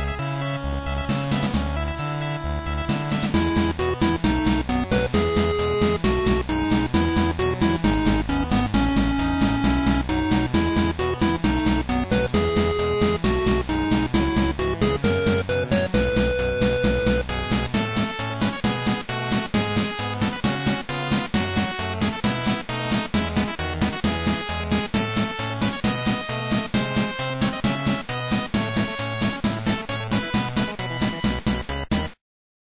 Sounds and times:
Music: 0.0 - 32.2.

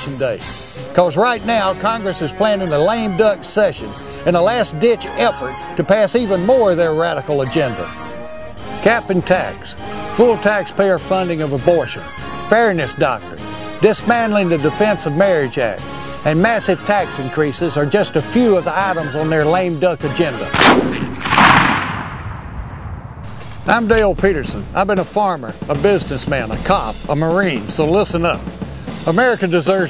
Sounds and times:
Speech: 0.0 - 7.9, 8.8 - 20.5, 23.7 - 28.4, 29.1 - 29.8
Music: 0.0 - 21.3, 23.2 - 29.8.

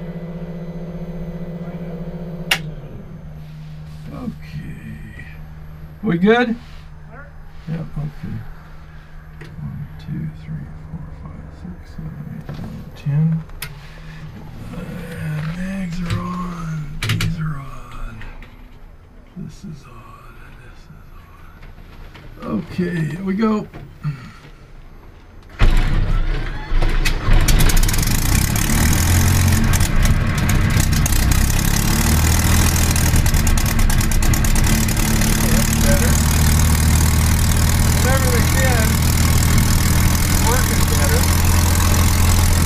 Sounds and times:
Speech: 14.7 - 18.4, 22.4 - 23.7, 40.4 - 41.3.

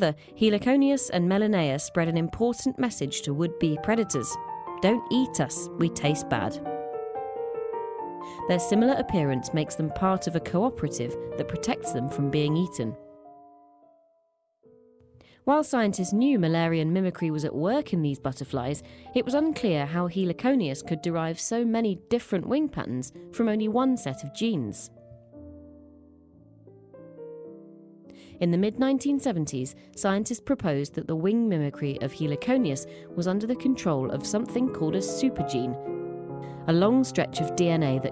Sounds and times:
Speech: 0.0 - 6.6, 8.4 - 13.0, 15.5 - 24.9, 28.4 - 35.8, 36.7 - 38.1
Music: 0.0 - 38.1.

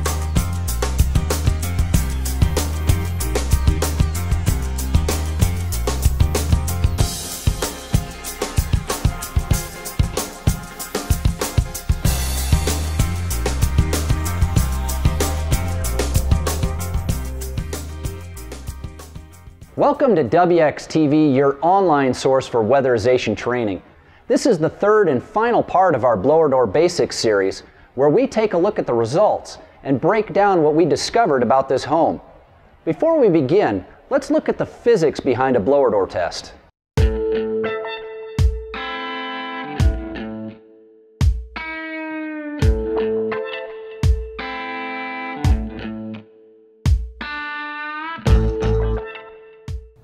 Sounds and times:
Speech: 19.8 - 36.6.

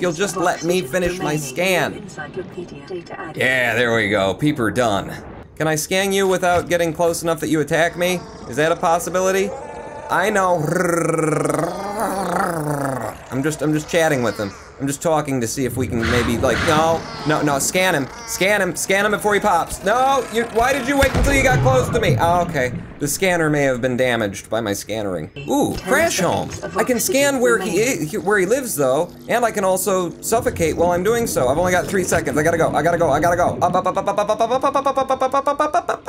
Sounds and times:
Speech: 0.0 - 35.5.

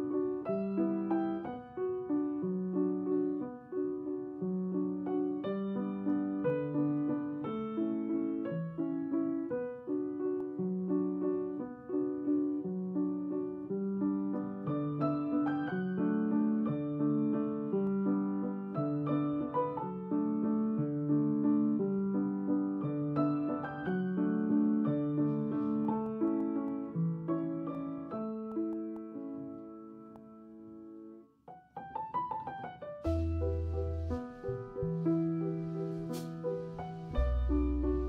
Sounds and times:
Piano: 0.0 - 38.0.

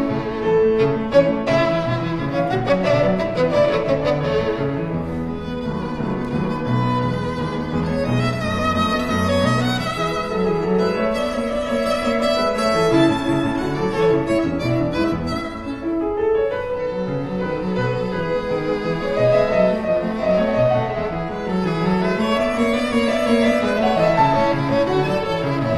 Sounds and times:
Violin, fiddle: 0.0 - 25.7.

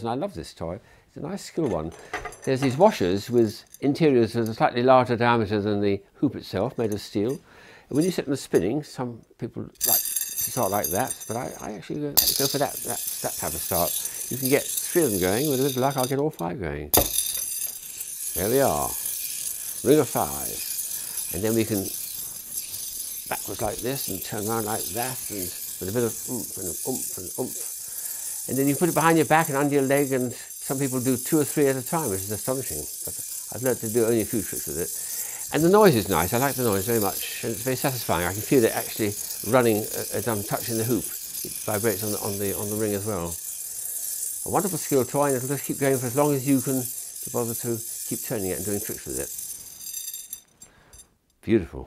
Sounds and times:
Speech: 0.0 - 9.8, 10.5 - 17.0, 18.4 - 19.0, 19.8 - 20.7, 21.3 - 21.9, 23.3 - 27.7, 28.5 - 32.9, 33.5 - 34.9, 35.5 - 43.4, 44.5 - 49.3, 51.4 - 51.8
Inside, small room: 0.0 - 51.8.

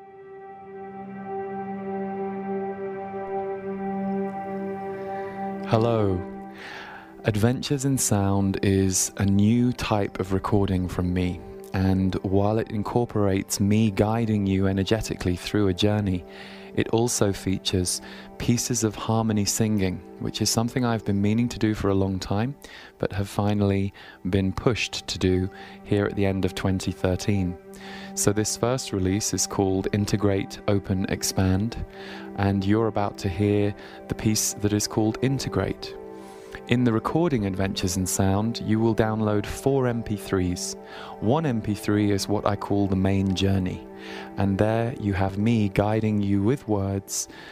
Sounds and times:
Music: 0.0 - 47.5
Speech: 5.7 - 6.3, 7.2 - 27.6, 28.2 - 36.0, 36.7 - 47.3.

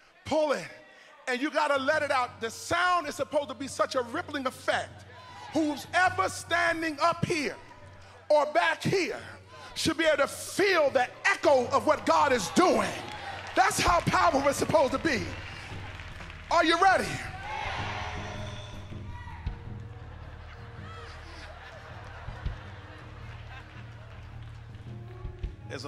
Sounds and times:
Speech: 0.2 - 4.9, 5.6 - 7.6, 8.3 - 13.0, 13.6 - 15.4.

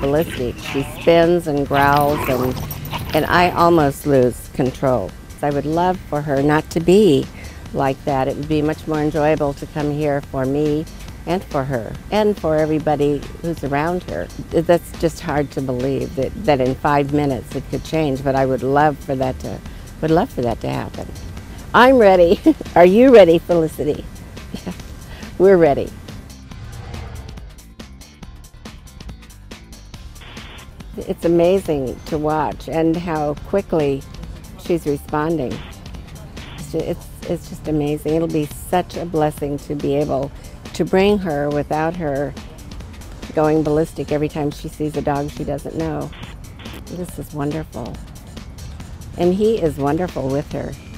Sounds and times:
Speech: 0.0 - 21.0, 21.8 - 24.0, 25.4 - 25.9, 31.0 - 34.0, 34.6 - 35.6, 36.6 - 42.4, 43.3 - 46.1, 46.9 - 48.0, 49.2 - 50.8
Music: 0.0 - 50.9.

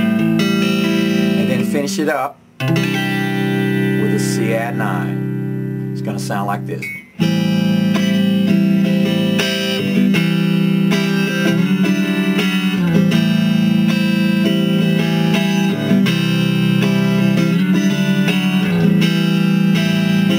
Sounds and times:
Electric guitar: 0.0 - 20.3
Speech: 1.4 - 2.4, 4.0 - 5.2, 6.0 - 7.0.

